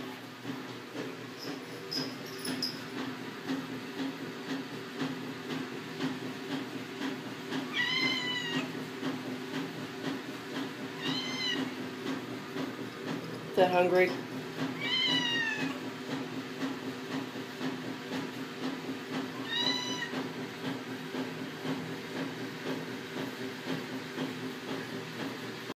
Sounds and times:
Meow: 0:07.7 - 0:08.7, 0:11.0 - 0:11.6, 0:14.8 - 0:15.8, 0:19.4 - 0:20.1.

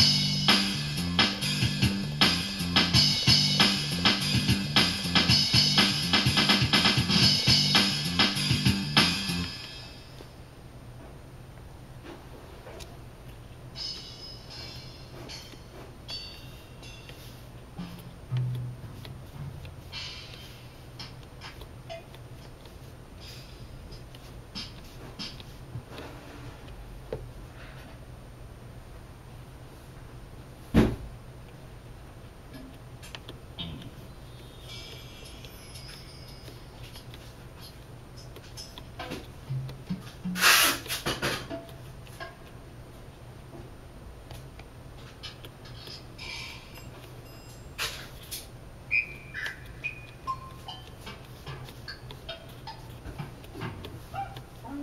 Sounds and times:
Drum machine: 0:00.0 - 0:10.1, 0:13.7 - 0:26.0, 0:33.4 - 0:36.1, 0:36.9 - 0:42.3.

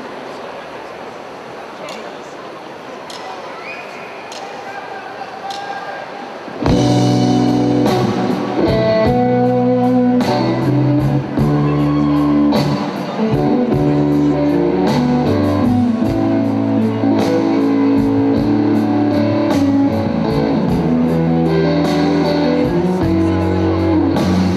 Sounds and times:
Music: 0:06.6 - 0:24.5.

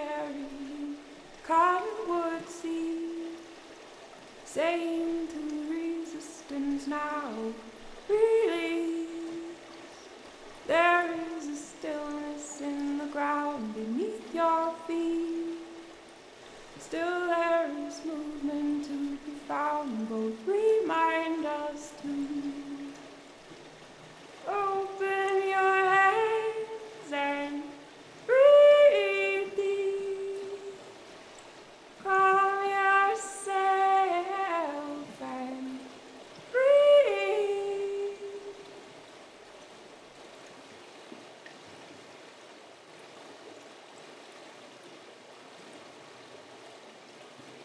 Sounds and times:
Stream: 0:00.0 - 0:47.6.

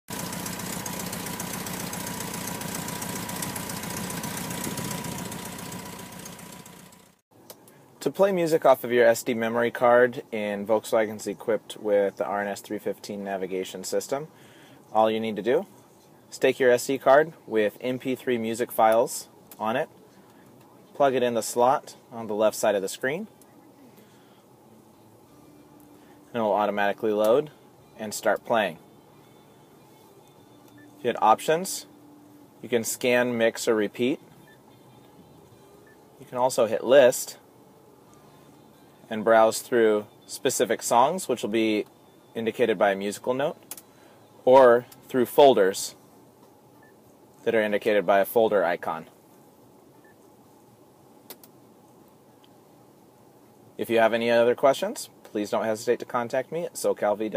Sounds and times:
Vehicle: 0:00.1 - 0:08.0
Speech: 0:08.0 - 0:14.3, 0:14.9 - 0:15.7, 0:16.3 - 0:19.9, 0:20.9 - 0:23.8, 0:26.3 - 0:28.8, 0:31.0 - 0:31.9, 0:32.6 - 0:34.2, 0:36.2 - 0:37.4, 0:39.1 - 0:41.8, 0:42.4 - 0:43.6, 0:44.4 - 0:46.0, 0:47.4 - 0:49.2, 0:53.8 - 0:57.3.

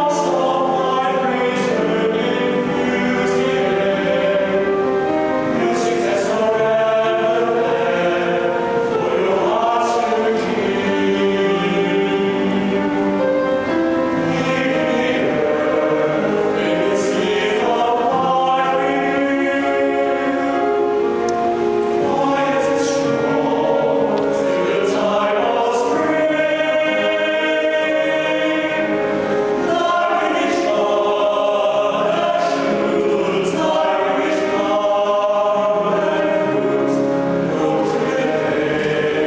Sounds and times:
Choir: 0:00.0 - 0:39.2.

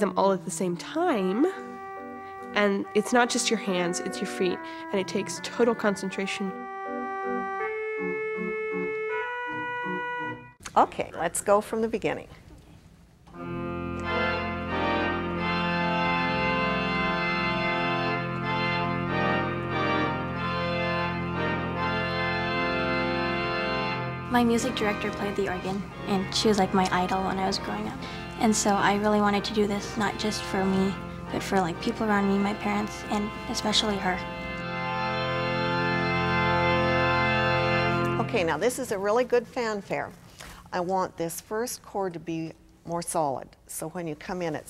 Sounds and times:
Speech: 0:00.0 - 0:01.6, 0:02.6 - 0:06.6, 0:10.7 - 0:12.4, 0:24.3 - 0:34.2, 0:38.2 - 0:44.7
Piano: 0:01.2 - 0:10.6, 0:13.4 - 0:38.3.

